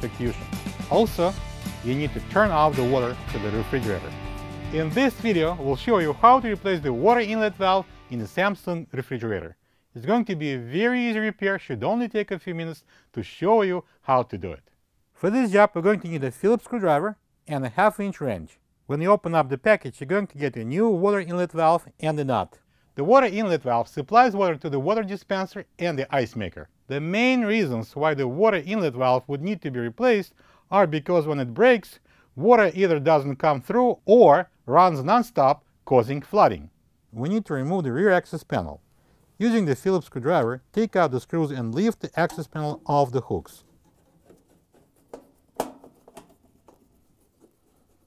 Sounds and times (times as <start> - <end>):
Music: 0.0 - 8.7
Speech: 0.0 - 38.8, 39.4 - 43.6.